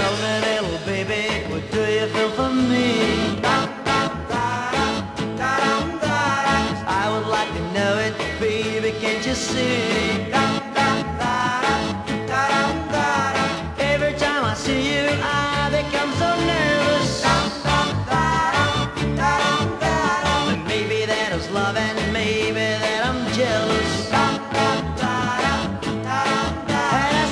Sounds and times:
Music: 0.0s - 27.3s.

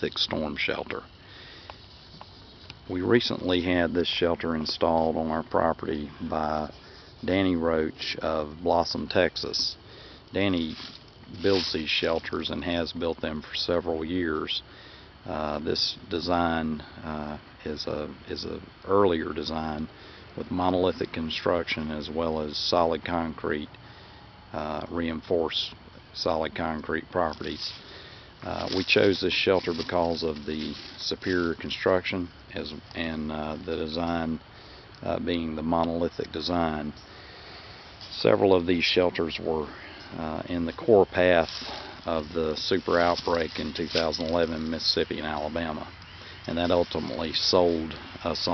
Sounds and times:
Speech: 0.0s - 1.1s, 2.9s - 23.8s, 24.5s - 27.8s, 28.4s - 34.4s, 35.0s - 37.0s, 38.0s - 48.5s.

